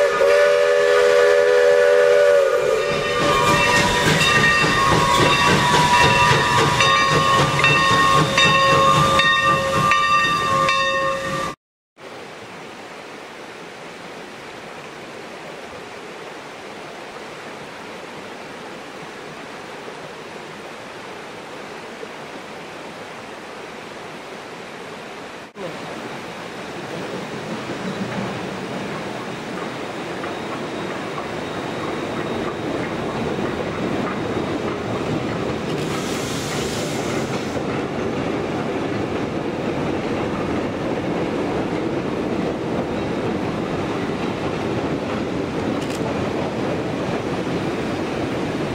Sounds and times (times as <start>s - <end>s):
Railroad car, train wagon: 0.0s - 11.6s, 25.6s - 48.7s
Train: 0.0s - 48.7s
Clickety-clack: 3.2s - 10.4s, 28.1s - 46.2s.